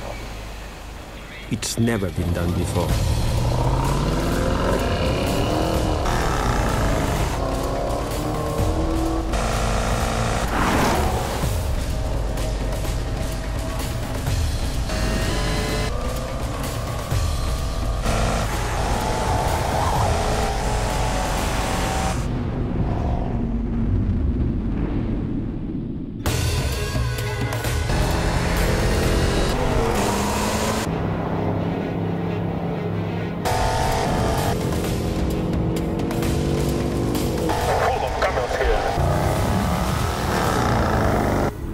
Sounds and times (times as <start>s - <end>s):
Car: 0.0s - 24.2s, 27.9s - 41.7s
Music: 2.0s - 22.4s, 26.2s - 41.7s.